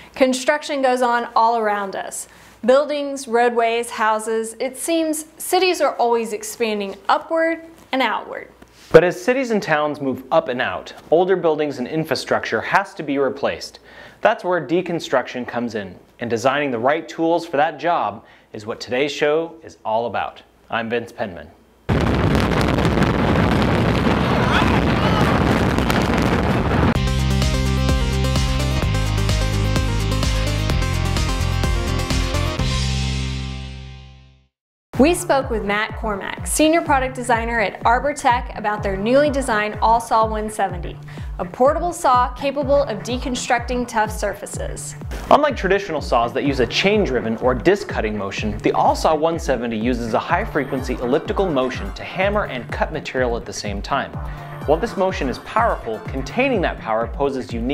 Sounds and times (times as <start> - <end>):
Speech: 0.2 - 21.6, 35.0 - 54.1, 54.7 - 57.7
Music: 26.8 - 57.7.